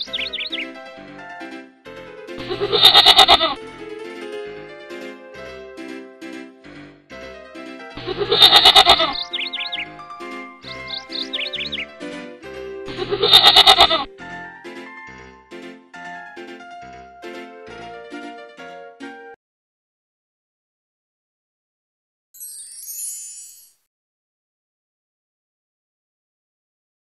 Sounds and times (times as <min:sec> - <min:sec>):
Music: 0:00.0 - 0:19.4, 0:22.4 - 0:23.9.